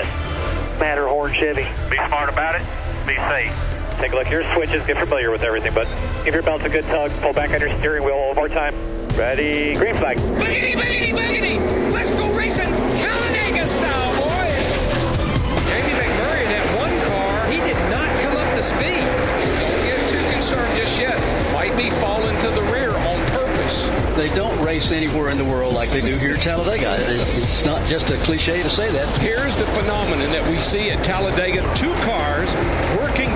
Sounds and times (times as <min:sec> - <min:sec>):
Music: 0:00.0 - 0:33.3
Speech: 0:00.8 - 0:14.7, 0:15.7 - 0:19.1, 0:19.7 - 0:33.3.